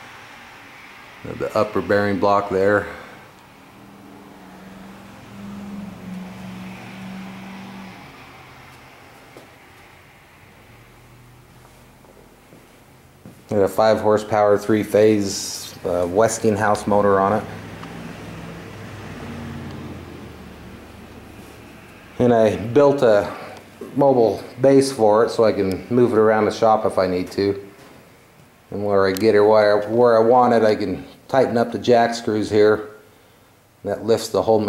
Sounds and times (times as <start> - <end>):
Speech: 1.2 - 3.2, 13.5 - 17.6, 22.2 - 27.7, 28.7 - 33.0, 33.8 - 34.6.